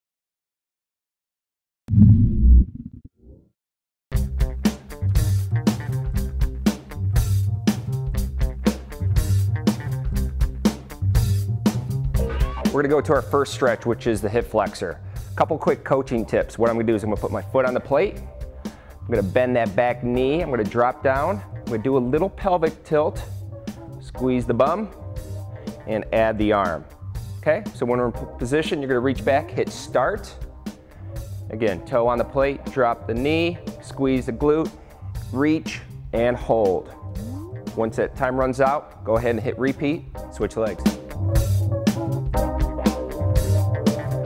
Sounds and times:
Music: 4.1s - 44.2s.

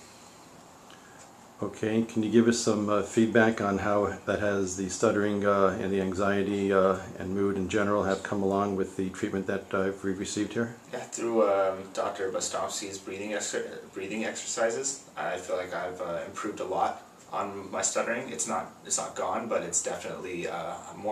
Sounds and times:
Speech: 1.6s - 21.1s.

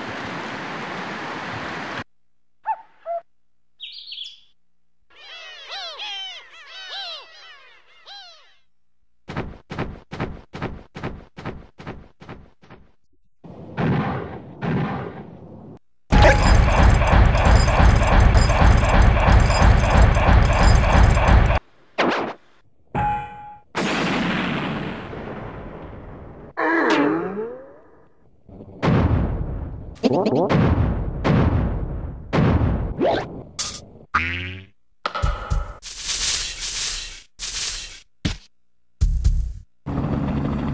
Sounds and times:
Sound effect: 13.4s - 22.4s, 23.0s - 33.9s, 35.1s - 38.4s.

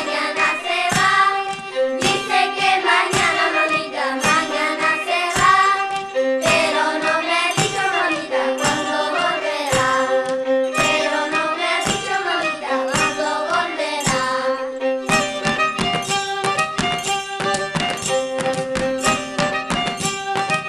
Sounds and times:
Violin, fiddle: 0.0s - 20.6s.

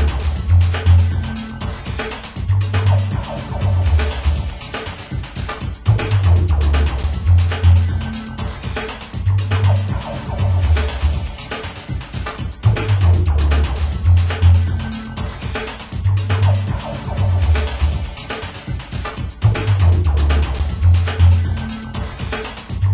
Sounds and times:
Music: 0.0s - 22.9s.

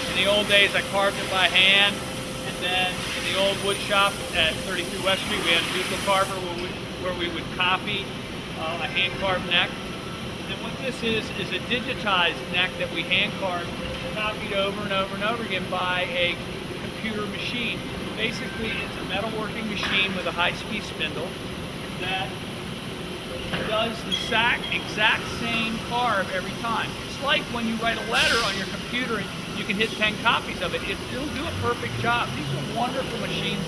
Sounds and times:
Speech: 0.1s - 9.8s, 10.5s - 21.4s, 22.0s - 22.4s, 23.5s - 33.6s.

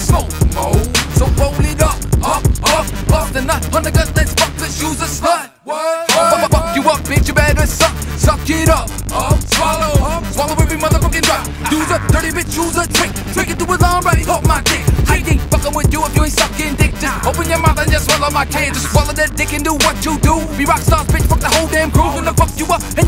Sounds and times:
Rock and roll: 0.0s - 5.2s, 6.1s - 23.0s.

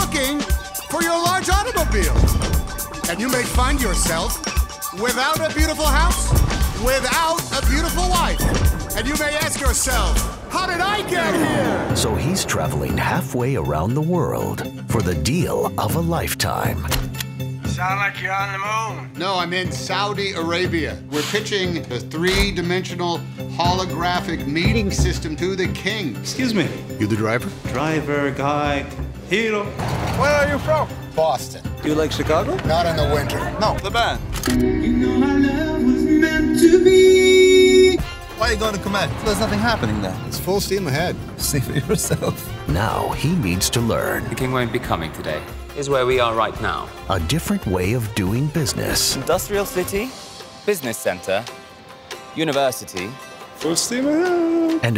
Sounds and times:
Music: 0.0s - 54.9s.

